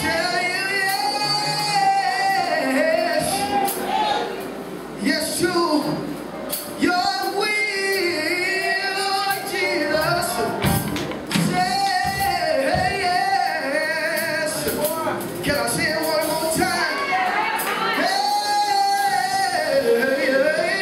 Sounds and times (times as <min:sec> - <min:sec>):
Male singing: 0:00.0 - 0:03.9, 0:05.0 - 0:06.1, 0:06.8 - 0:20.8
Music: 0:00.0 - 0:20.8.